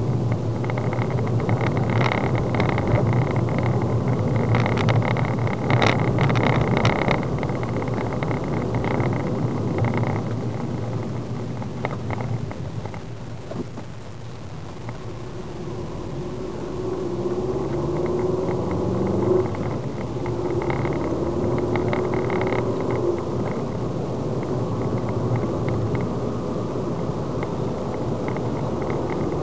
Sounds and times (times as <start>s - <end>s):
Car: 0.0s - 29.4s.